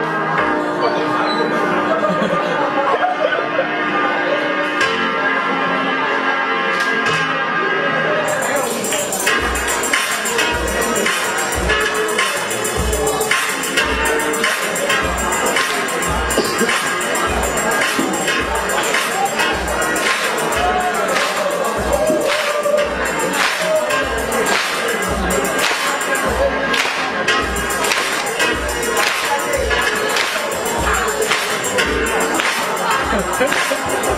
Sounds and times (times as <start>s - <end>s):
Dance music: 0.0s - 34.1s
Soundtrack music: 1.8s - 34.1s
Pop music: 6.7s - 34.1s.